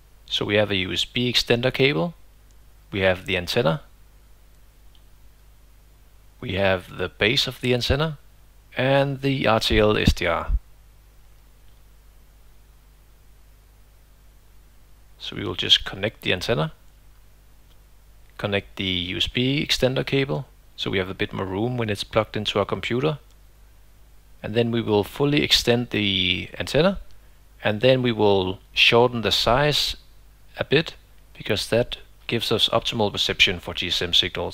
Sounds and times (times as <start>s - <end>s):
Speech: 0.3s - 2.2s, 2.9s - 3.9s, 6.4s - 8.2s, 8.8s - 10.6s, 15.2s - 16.8s, 18.4s - 23.3s, 24.4s - 34.5s.